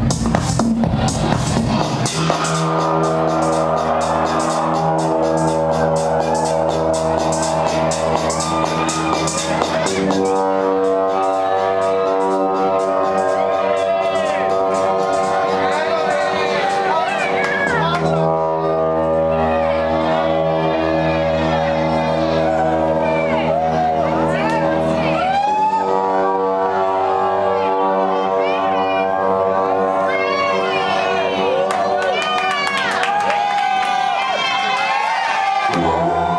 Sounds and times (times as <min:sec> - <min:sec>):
Music: 0:00.0 - 0:36.3.